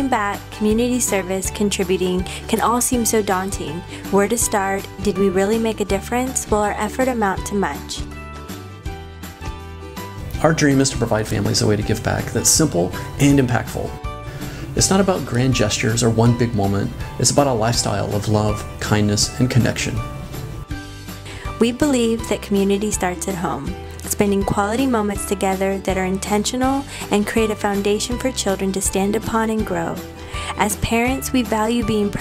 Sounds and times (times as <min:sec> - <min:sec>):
Speech: 0:00.0 - 0:08.0, 0:10.4 - 0:14.0, 0:14.8 - 0:20.0, 0:21.6 - 0:32.2
Music: 0:00.0 - 0:32.2.